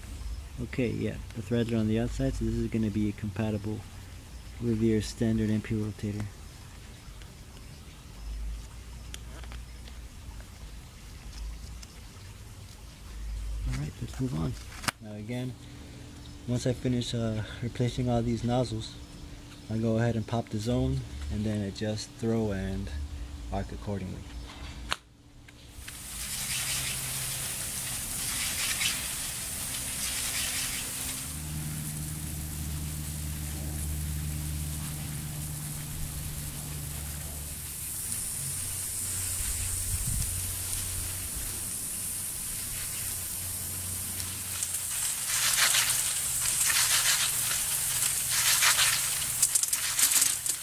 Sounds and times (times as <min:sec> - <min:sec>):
Spray: 0:25.8 - 0:50.6.